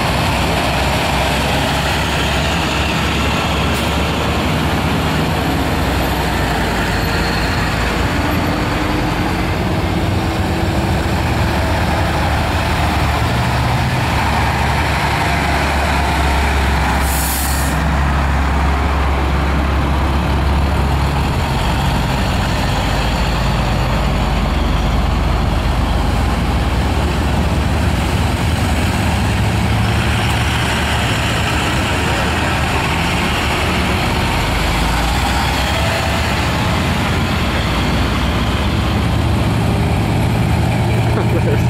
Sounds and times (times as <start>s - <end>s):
Car: 0.0s - 41.6s
Air brake: 17.0s - 17.8s.